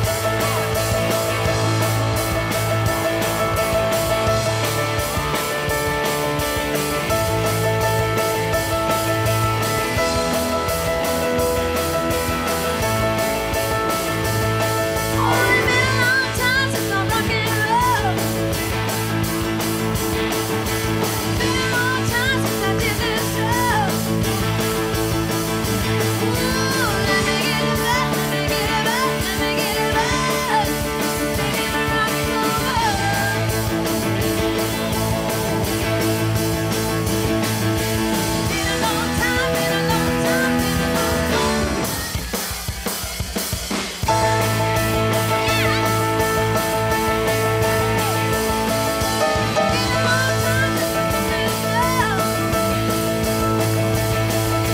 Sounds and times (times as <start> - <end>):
Music: 0.0 - 54.7.